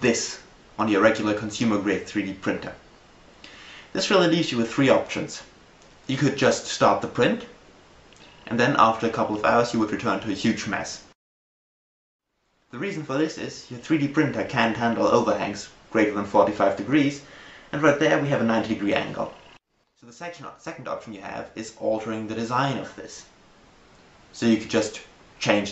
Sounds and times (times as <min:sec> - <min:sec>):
Speech: 0:00.0 - 0:02.8, 0:03.9 - 0:05.5, 0:06.1 - 0:07.6, 0:08.5 - 0:11.2, 0:12.8 - 0:19.4, 0:20.0 - 0:23.3, 0:24.4 - 0:25.7.